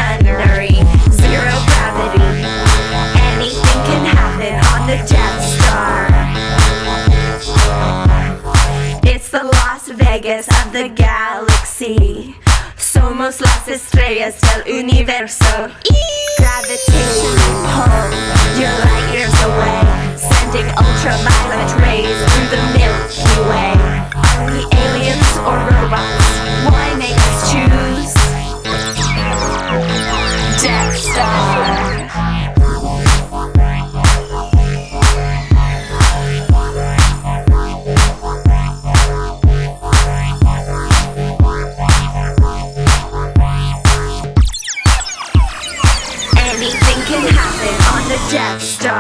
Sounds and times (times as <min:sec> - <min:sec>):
Music: 0:00.0 - 0:49.0.